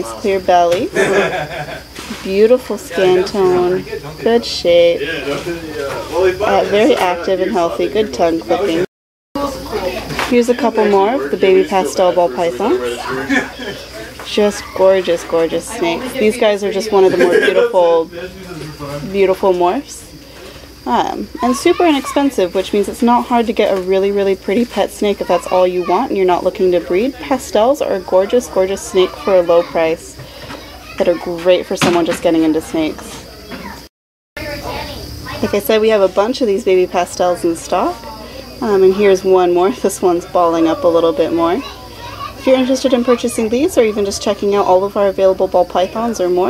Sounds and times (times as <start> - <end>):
Speech: 2.2 - 20.1, 34.4 - 46.5.